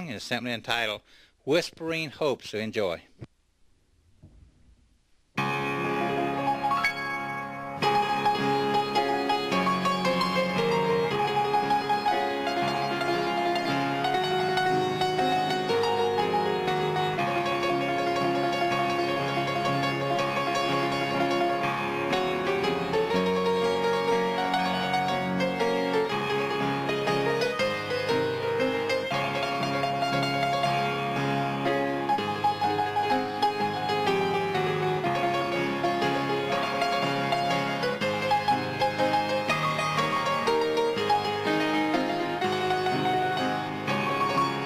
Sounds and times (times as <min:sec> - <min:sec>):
Gospel music: 0:05.4 - 0:44.6.